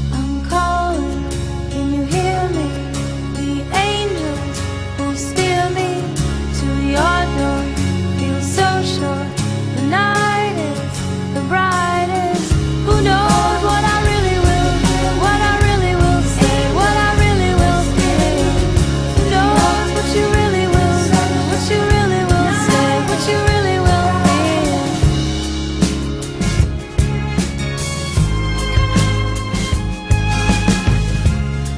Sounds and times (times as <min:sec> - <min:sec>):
Music: 0:00.0 - 0:31.7.